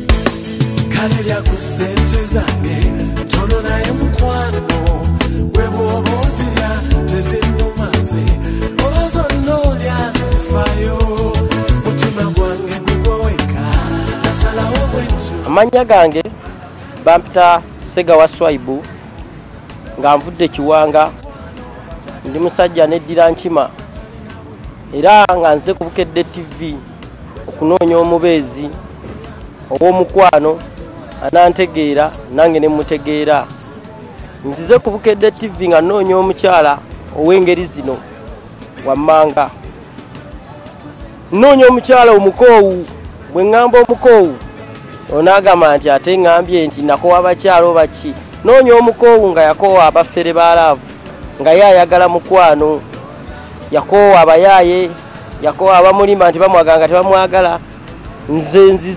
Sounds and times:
Music of Africa: 0.0 - 58.9.

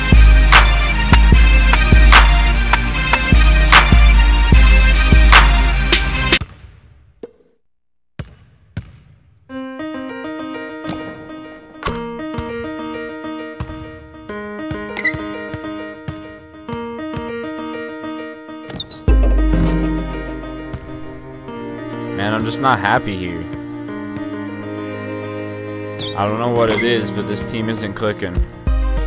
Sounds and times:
Music: 0.0 - 6.6, 9.5 - 29.0
Basketball bounce: 8.2 - 9.3.

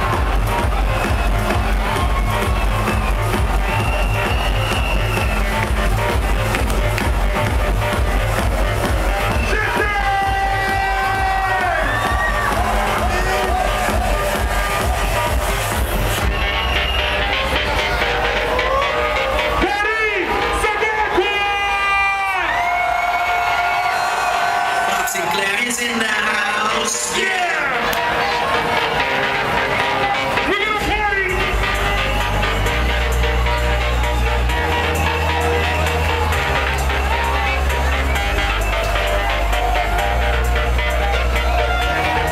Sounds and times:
Techno: 0.0 - 42.3.

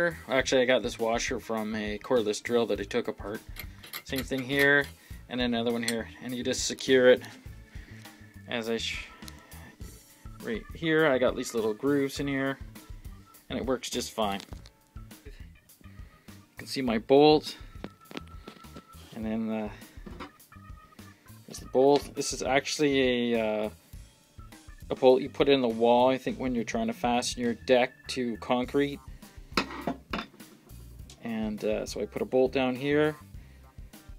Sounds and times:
Speech: 0.0 - 3.4, 4.1 - 7.3, 8.5 - 9.1, 10.4 - 12.6, 13.5 - 14.4, 19.2 - 19.8, 21.5 - 23.7, 24.9 - 29.0, 31.2 - 33.2
Music: 0.0 - 34.1.

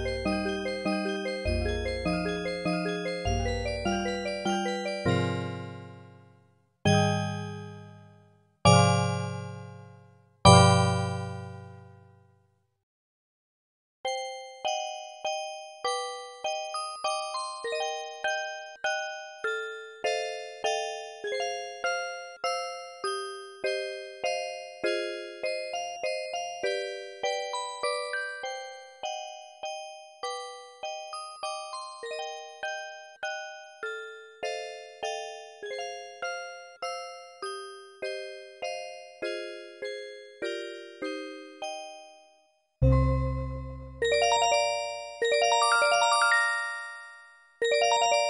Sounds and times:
Piano: 0.0 - 6.3, 6.9 - 8.1, 8.7 - 12.2, 42.8 - 48.3.

